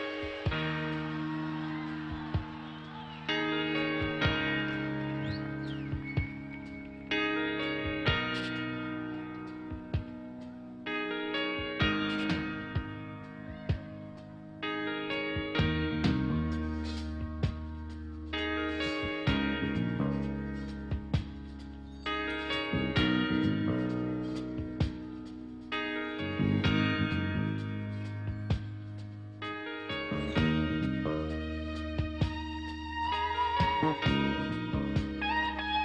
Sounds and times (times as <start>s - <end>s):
Music: 0.0s - 35.8s.